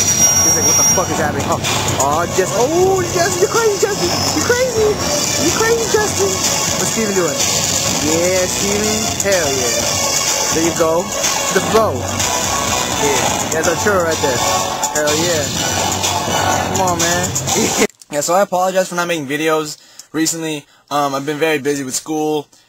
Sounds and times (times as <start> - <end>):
Music: 0.0 - 17.9
Speech: 0.4 - 7.4, 8.0 - 9.8, 13.0 - 14.4, 15.0 - 15.5, 16.7 - 17.3, 18.1 - 22.5.